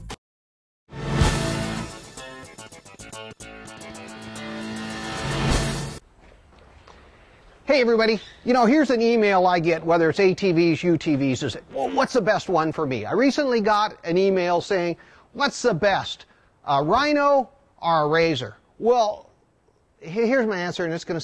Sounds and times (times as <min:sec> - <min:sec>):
Speech: 0:07.7 - 0:19.3, 0:20.0 - 0:21.2.